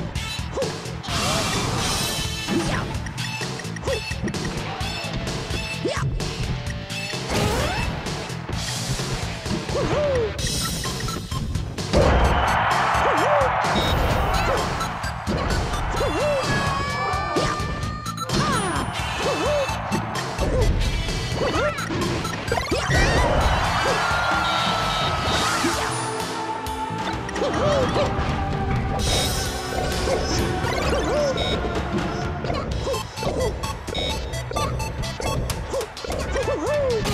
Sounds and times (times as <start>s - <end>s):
Music: 0.0s - 37.1s.